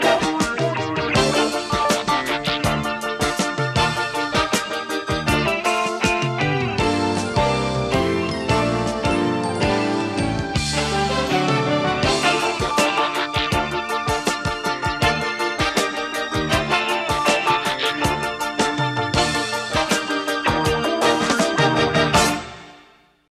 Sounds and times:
Music: 0.0s - 23.3s.

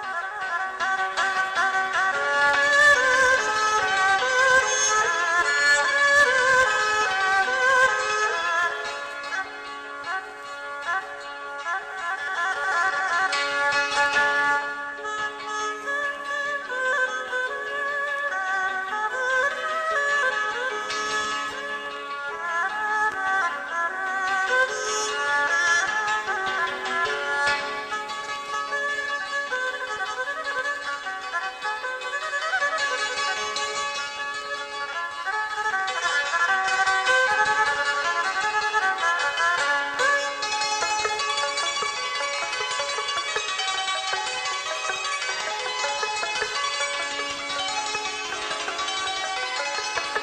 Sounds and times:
Music: 0.0s - 50.2s.

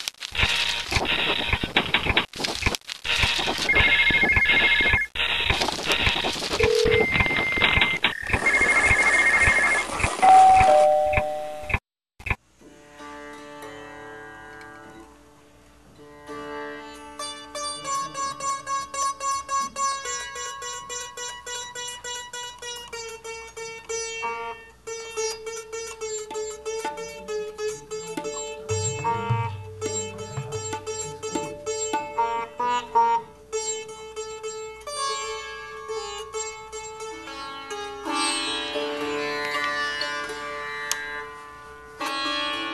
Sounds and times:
Sitar: 12.7s - 42.7s.

